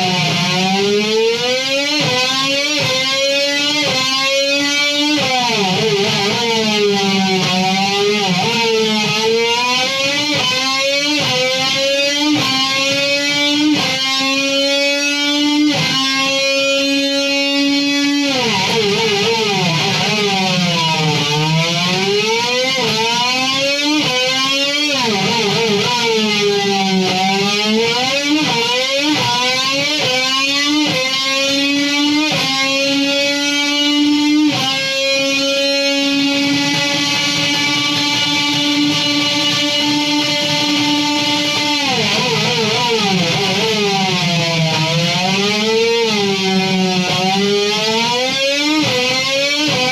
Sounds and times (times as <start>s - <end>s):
Electric guitar: 0.0s - 49.9s.